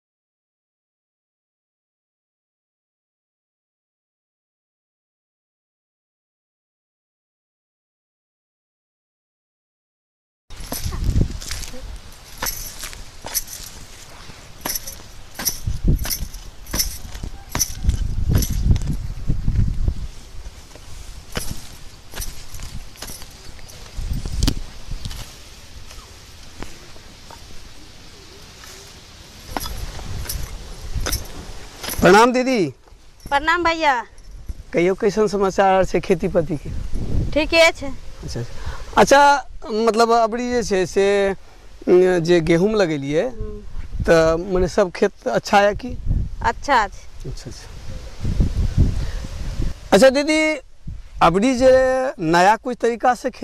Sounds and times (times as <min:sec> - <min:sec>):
Outside, rural or natural: 0:10.5 - 0:53.4.